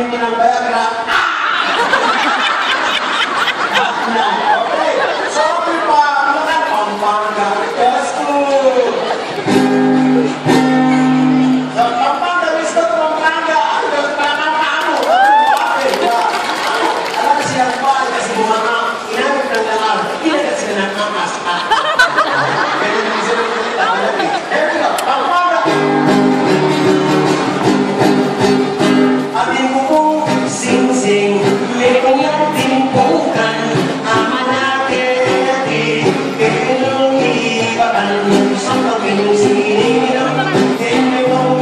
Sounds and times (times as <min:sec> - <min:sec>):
Speech: 0:03.8 - 0:09.2, 0:11.8 - 0:21.7, 0:22.8 - 0:25.7.